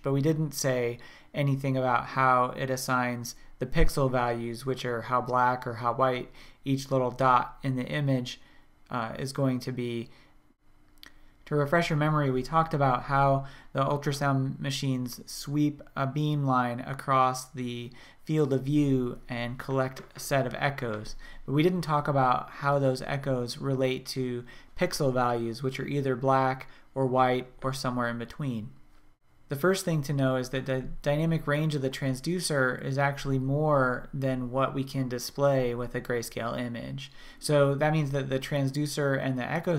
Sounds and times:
Speech: 0.0 - 10.2, 11.5 - 28.8, 29.5 - 39.7.

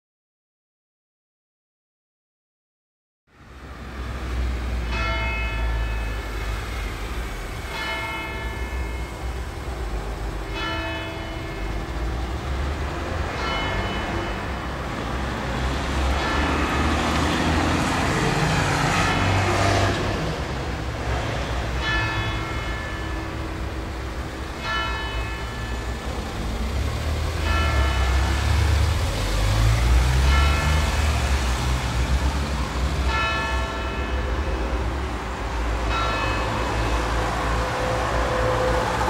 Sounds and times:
Car: 3.3 - 39.1.

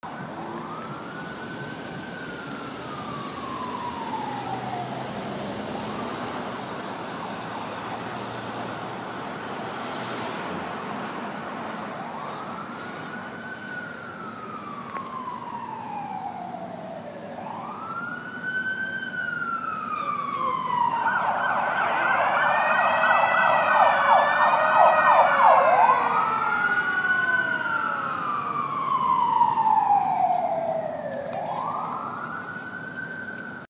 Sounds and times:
Fire engine, fire truck (siren): 0.0 - 33.7.

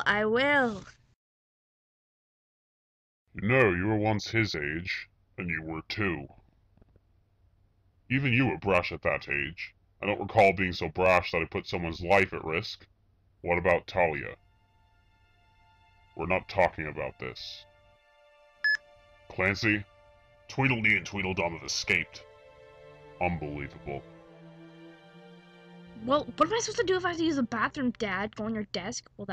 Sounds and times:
Speech: 0.0 - 0.8, 3.4 - 6.4, 8.1 - 12.9, 13.5 - 14.4, 16.2 - 17.6, 19.3 - 19.8, 20.5 - 22.2, 23.2 - 24.0, 26.0 - 29.3.

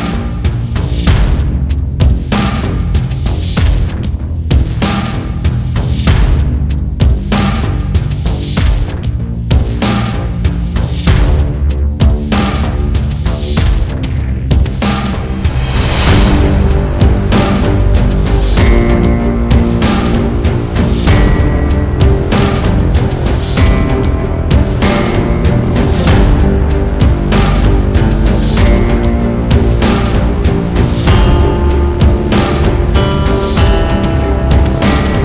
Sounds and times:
Music: 0.0 - 35.2.

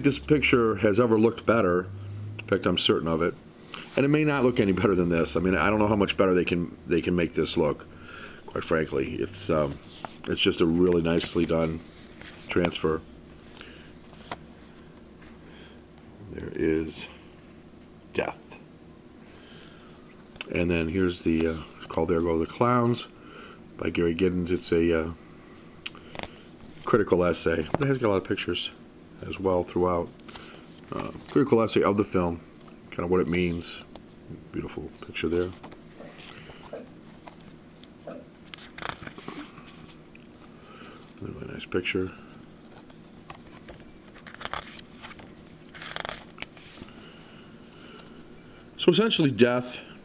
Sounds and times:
Speech: 0.0 - 1.9, 2.5 - 3.4, 4.0 - 7.8, 8.5 - 11.8, 12.5 - 13.1, 16.2 - 17.2, 18.1 - 18.6, 20.4 - 23.1, 23.8 - 25.2, 26.9 - 30.1, 30.9 - 33.9, 34.5 - 35.6, 41.2 - 42.2, 48.8 - 49.9.

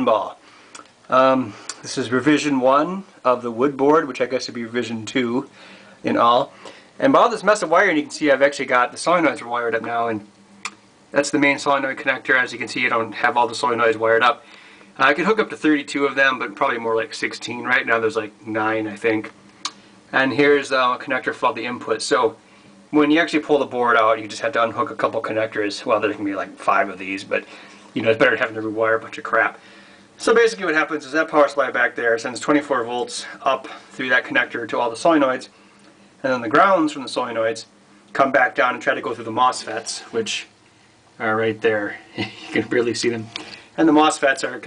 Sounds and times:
Speech: 0.0 - 0.4, 1.1 - 10.3, 11.1 - 14.4, 15.0 - 19.4, 20.1 - 29.6, 30.2 - 35.6, 36.2 - 40.6, 41.2 - 44.6.

